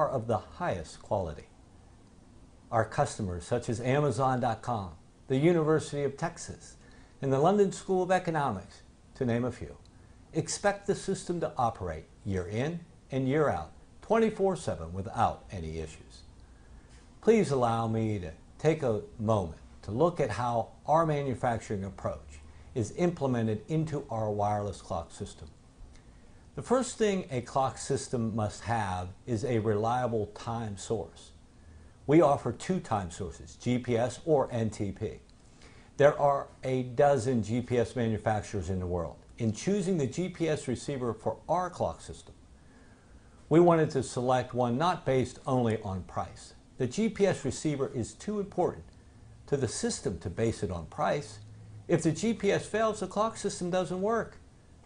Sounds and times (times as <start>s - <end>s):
Speech: 0.0s - 1.6s, 2.7s - 16.3s, 17.2s - 25.6s, 26.6s - 31.4s, 32.1s - 35.3s, 36.0s - 42.4s, 43.5s - 54.4s.